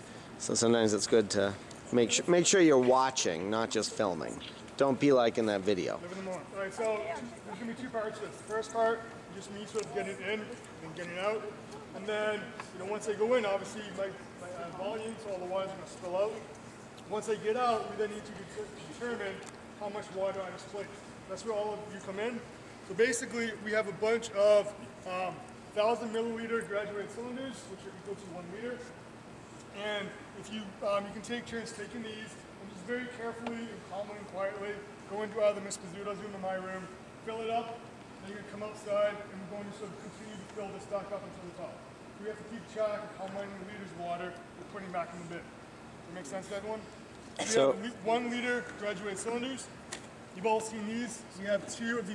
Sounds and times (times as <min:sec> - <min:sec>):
Speech: 0:00.4 - 0:16.5, 0:17.1 - 0:29.0, 0:29.8 - 0:45.5, 0:46.1 - 0:49.7, 0:50.4 - 0:52.1.